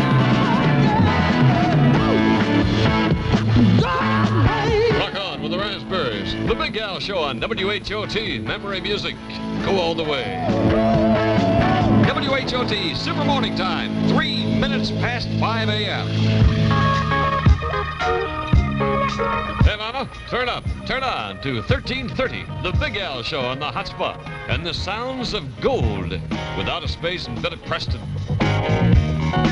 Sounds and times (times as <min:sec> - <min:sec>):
Music: 0:00.0 - 0:29.5
Speech: 0:05.0 - 0:10.4, 0:12.0 - 0:16.1, 0:19.6 - 0:28.0.